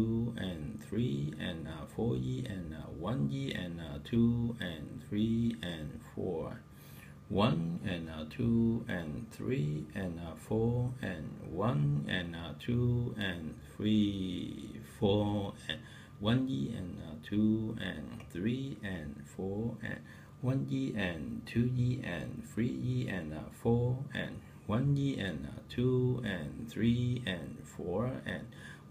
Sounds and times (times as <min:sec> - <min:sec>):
Speech: 0:00.0 - 0:06.6, 0:07.3 - 0:28.6.